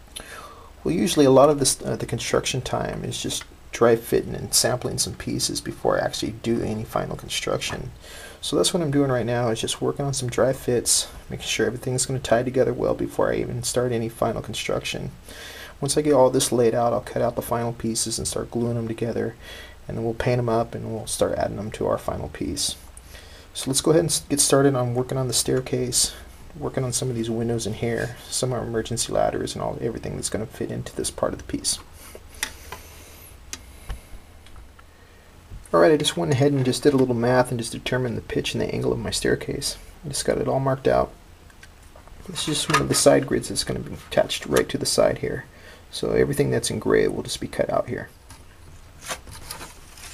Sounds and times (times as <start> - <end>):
Inside, small room: 0.0 - 50.1
Speech: 0.8 - 15.2, 15.8 - 22.9, 23.6 - 31.9, 35.6 - 41.2, 42.2 - 48.2.